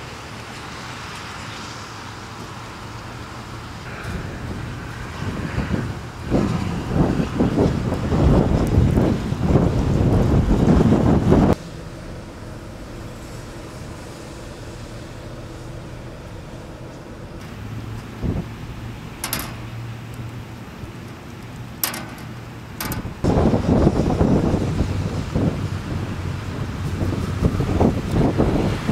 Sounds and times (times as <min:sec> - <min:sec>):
Wind noise (microphone): 0:03.9 - 0:11.6, 0:21.8 - 0:28.9.